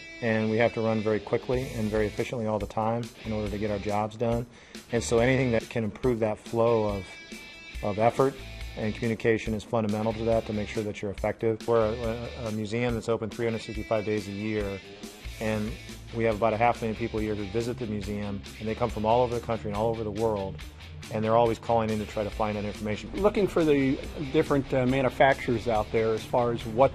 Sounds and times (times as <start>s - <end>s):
Rock and roll: 0.1s - 26.9s
Speech: 0.2s - 7.1s, 7.8s - 14.8s, 15.4s - 26.9s.